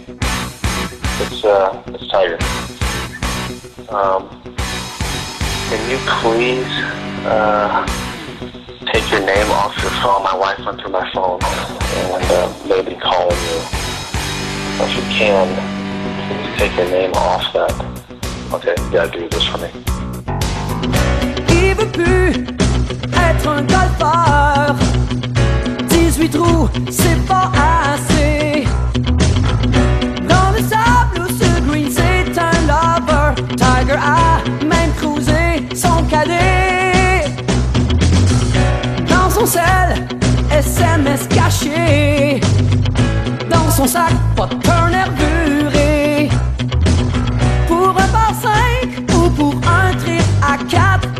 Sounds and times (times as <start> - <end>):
Music: 0.0 - 51.1.